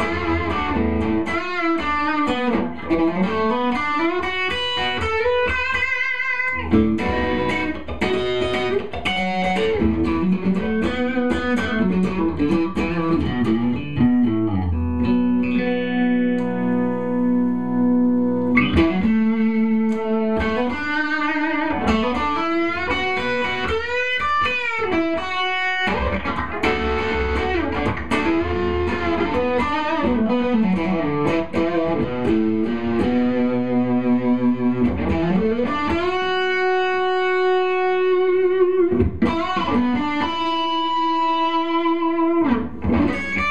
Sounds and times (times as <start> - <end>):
Electric guitar: 0.0 - 43.5
Tapping (guitar technique): 0.0 - 43.5.